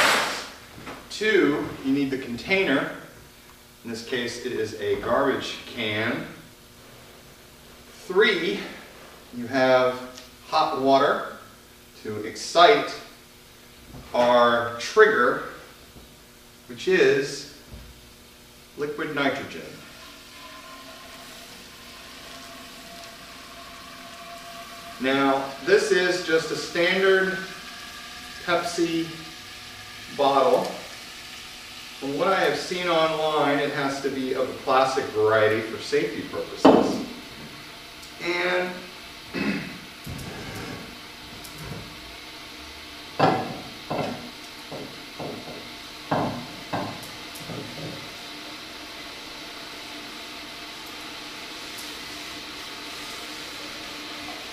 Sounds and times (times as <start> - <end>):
Speech: 1.1 - 3.1, 3.8 - 6.4, 8.0 - 8.8, 9.4 - 11.4, 12.0 - 13.1, 14.1 - 15.6, 16.7 - 17.6, 18.8 - 20.0, 25.0 - 27.5, 28.4 - 29.2, 30.1 - 30.8, 32.0 - 37.1, 38.2 - 38.9.